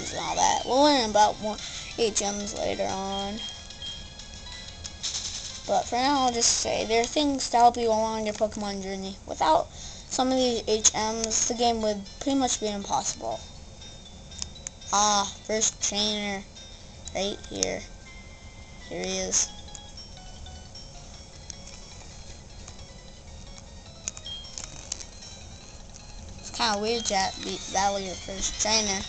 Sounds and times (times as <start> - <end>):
Speech: 0.0 - 3.4, 5.7 - 13.4, 15.0 - 16.5, 17.2 - 17.9, 18.9 - 19.5, 26.5 - 29.0
Music: 0.0 - 8.5, 9.9 - 29.0.